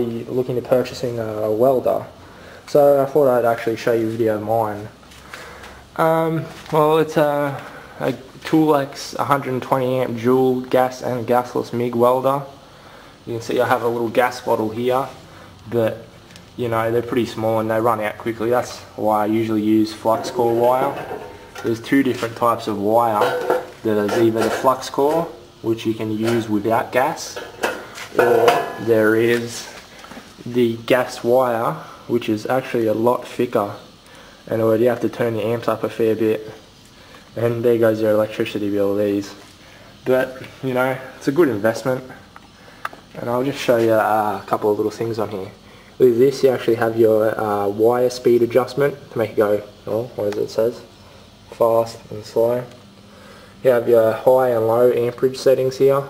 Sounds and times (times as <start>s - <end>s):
Speech: 0.0s - 5.0s, 6.0s - 12.6s, 13.2s - 29.8s, 30.4s - 33.9s, 34.5s - 36.6s, 37.4s - 39.4s, 40.0s - 42.3s, 43.1s - 50.9s, 51.5s - 52.8s, 53.6s - 56.1s.